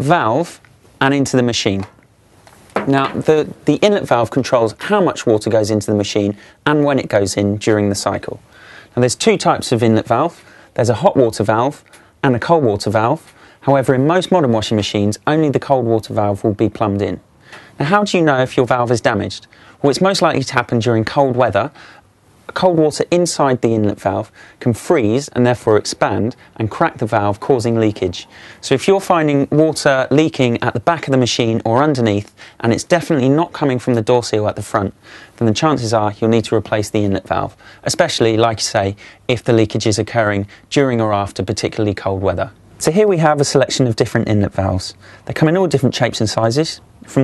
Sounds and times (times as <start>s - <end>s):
Speech: 0.0s - 2.0s, 2.8s - 21.8s, 22.5s - 47.2s.